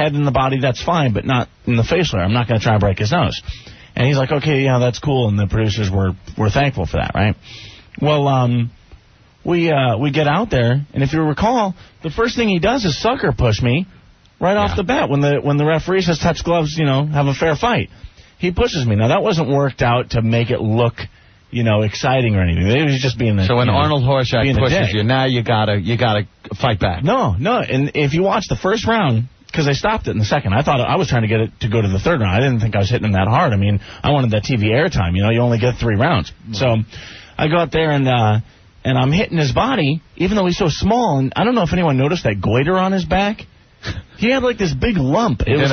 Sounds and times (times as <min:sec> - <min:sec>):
Speech: 0:00.0 - 0:03.4, 0:04.0 - 0:07.4, 0:08.0 - 0:08.8, 0:09.4 - 0:43.5, 0:44.2 - 0:45.7.